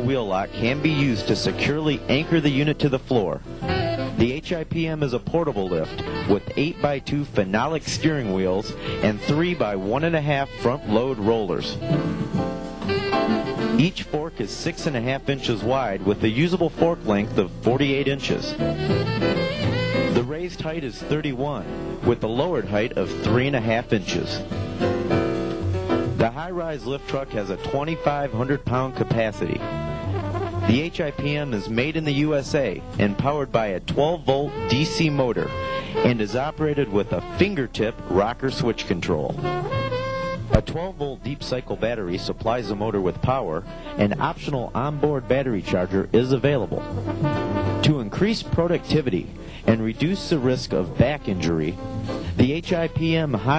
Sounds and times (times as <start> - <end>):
Speech: 0.0 - 3.4, 4.1 - 12.3, 13.8 - 18.6, 20.1 - 24.4, 26.2 - 29.7, 30.7 - 39.4, 40.5 - 53.5
Music: 0.0 - 53.5.